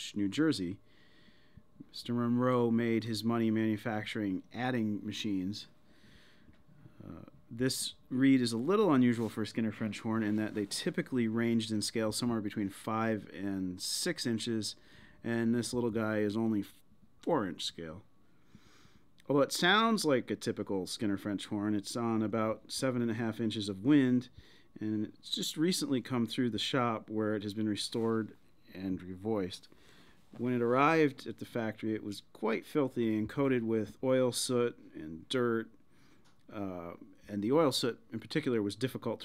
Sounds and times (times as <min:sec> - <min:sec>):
Speech: 0:00.0 - 0:00.8, 0:01.8 - 0:05.7, 0:07.0 - 0:18.1, 0:19.2 - 0:29.7, 0:30.4 - 0:35.8, 0:36.5 - 0:39.2.